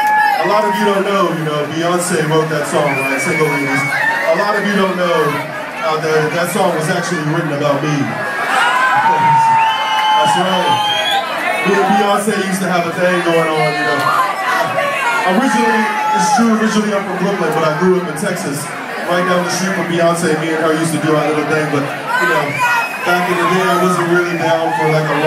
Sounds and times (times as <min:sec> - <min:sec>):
Crowd: 0:00.0 - 0:25.2
Speech: 0:00.4 - 0:08.2, 0:10.2 - 0:10.8, 0:11.6 - 0:25.2.